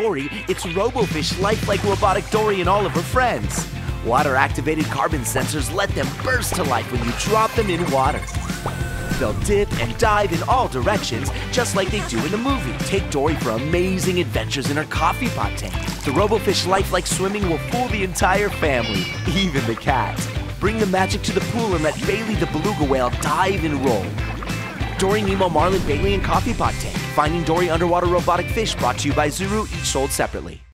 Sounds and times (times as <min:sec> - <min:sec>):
Speech: 0:00.0 - 0:08.3, 0:09.2 - 0:24.2, 0:24.9 - 0:30.7
Music: 0:00.0 - 0:30.7.